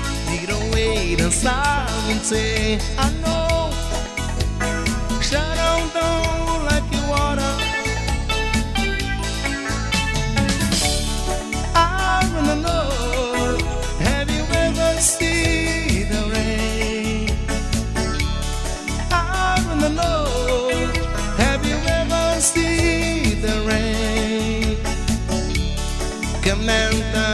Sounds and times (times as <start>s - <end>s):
Music: 0.0s - 27.3s.